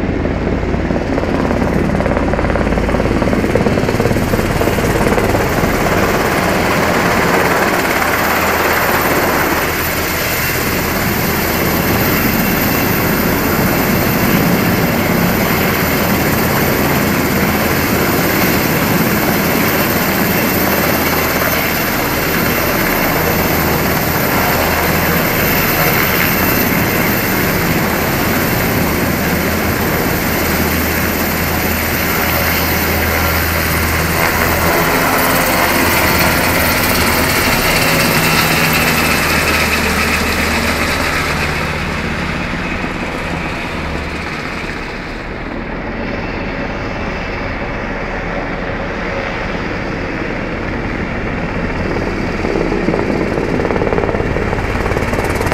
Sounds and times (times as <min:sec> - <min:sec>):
Helicopter: 0:00.0 - 0:55.5.